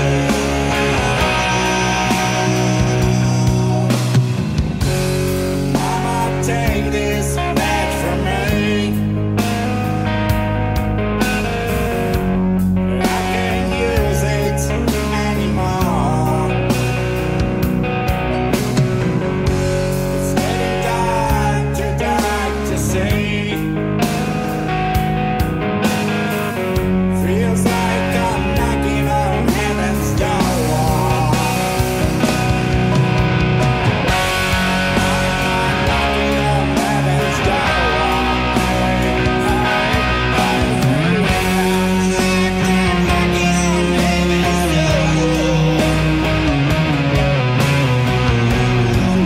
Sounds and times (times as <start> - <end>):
Music: 0.0 - 49.2.